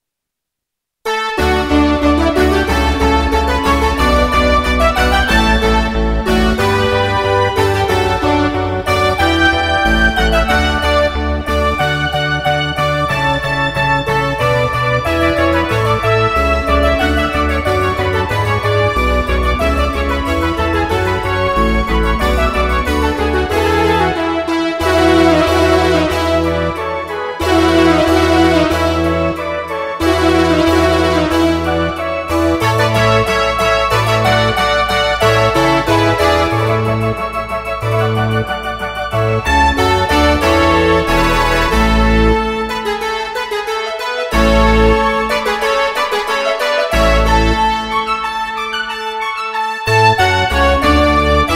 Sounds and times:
Music: 1.0 - 51.5.

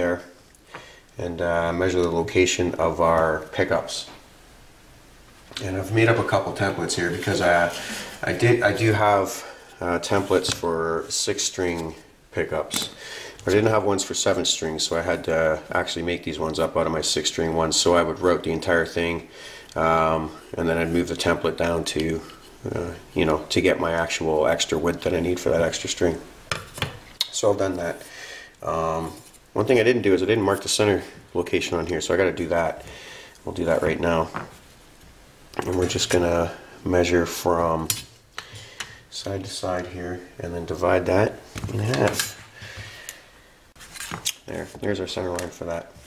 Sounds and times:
Speech: 0.0 - 0.4, 1.2 - 4.2, 5.5 - 26.3, 27.2 - 32.8, 33.4 - 34.5, 35.6 - 38.0, 39.1 - 42.4, 44.4 - 46.0
Inside, small room: 0.0 - 46.0.

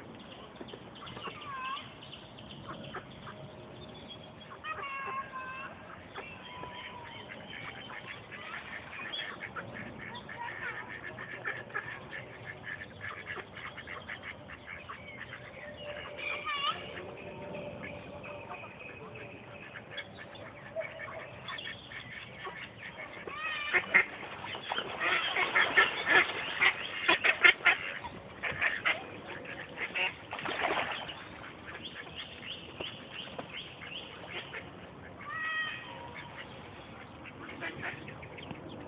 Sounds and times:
Quack: 4.6 - 16.9, 19.6 - 32.3, 32.9 - 35.3, 35.9 - 38.5.

